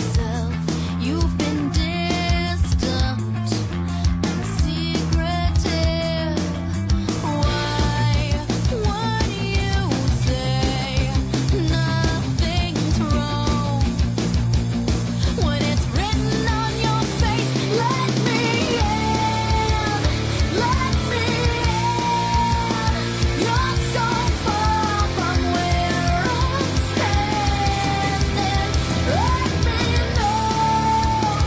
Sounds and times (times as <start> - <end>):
Pop music: 0.0 - 31.4.